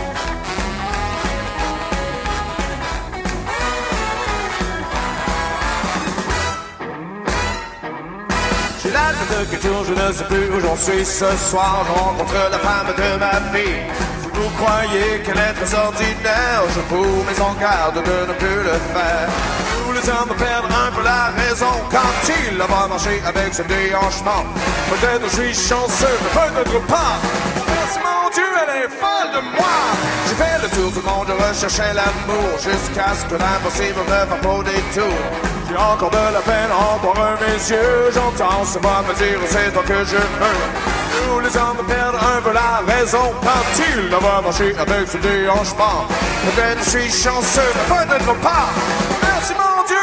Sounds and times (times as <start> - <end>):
Music: 0.0 - 50.0.